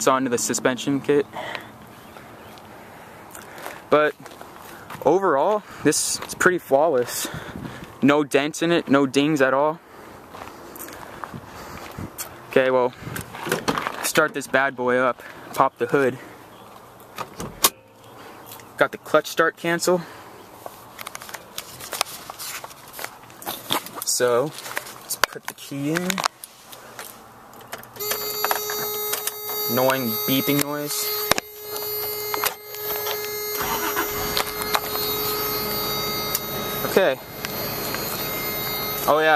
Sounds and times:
Speech: 0.0 - 1.6, 3.9 - 4.2, 5.0 - 7.4, 8.0 - 9.8, 12.5 - 13.0, 14.0 - 16.3, 18.8 - 20.1, 24.0 - 26.3, 29.7 - 31.1, 36.8 - 37.2, 39.0 - 39.3.

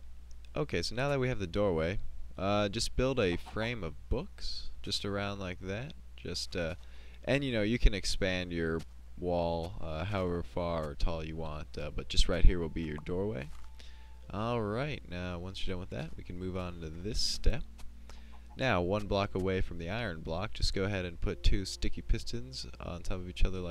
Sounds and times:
Speech: 0.5 - 13.6, 14.3 - 17.6, 18.6 - 23.7.

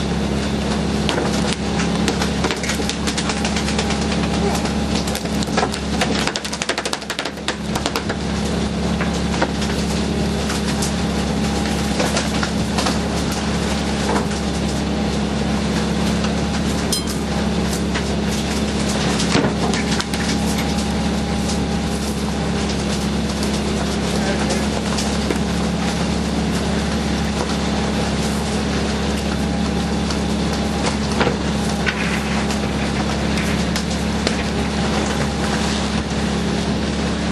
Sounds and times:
Motorboat, speedboat: 0.0 - 37.3.

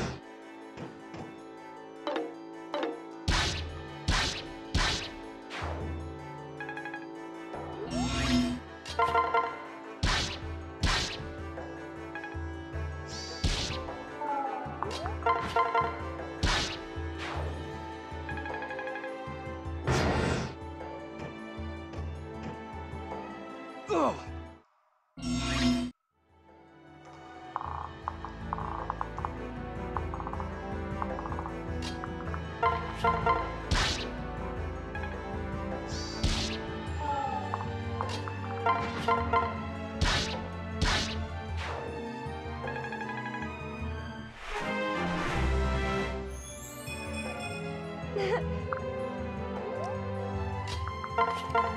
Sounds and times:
Music: 0.0 - 51.7.

